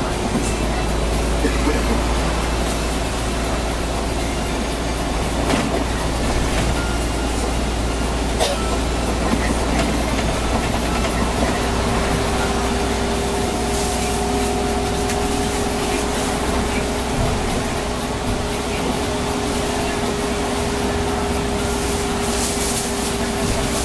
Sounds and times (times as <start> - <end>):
Bus: 0.0 - 23.8.